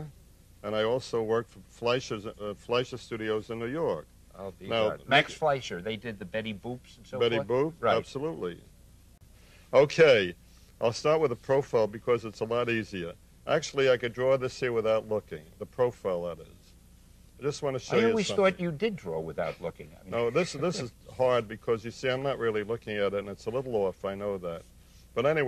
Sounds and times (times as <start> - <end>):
Speech: 0.0 - 8.7, 9.7 - 16.7, 17.4 - 24.6, 25.2 - 25.4.